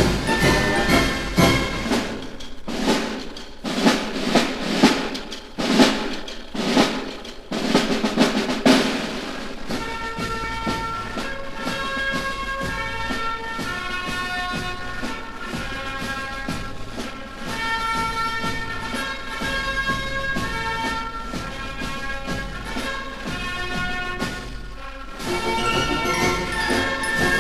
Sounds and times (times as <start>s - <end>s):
Drum roll: 0.0s - 27.4s.